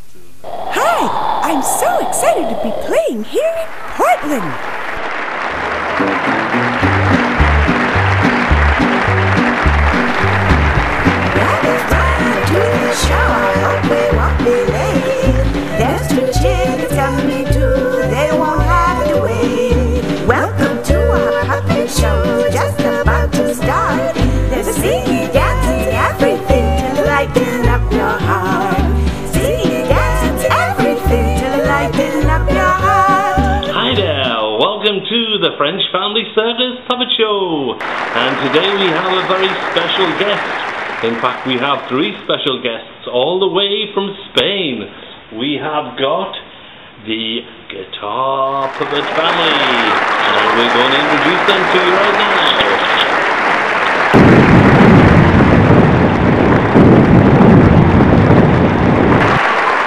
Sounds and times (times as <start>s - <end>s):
Strum: 6.0s - 34.3s.